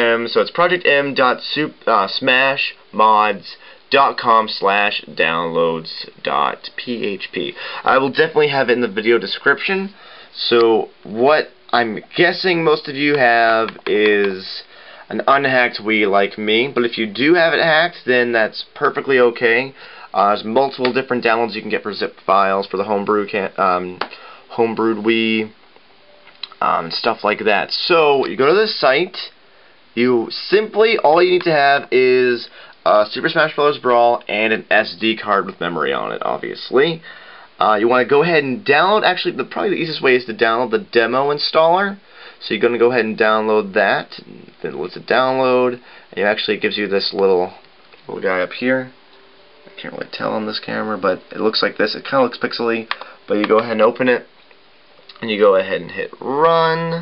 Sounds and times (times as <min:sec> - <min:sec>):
Speech: 0:00.0 - 0:25.6, 0:26.5 - 0:29.4, 0:30.0 - 0:49.0, 0:49.7 - 0:54.3, 0:55.1 - 0:57.0.